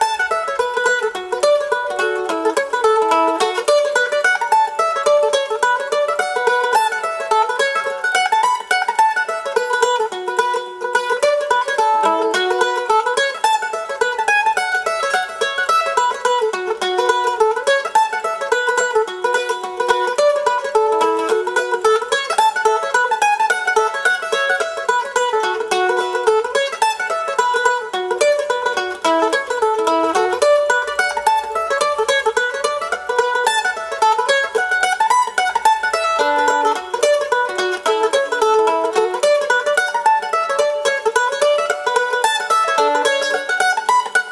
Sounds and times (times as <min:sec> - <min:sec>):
Banjo: 0:00.0 - 0:44.3
Mandolin: 0:00.0 - 0:44.3.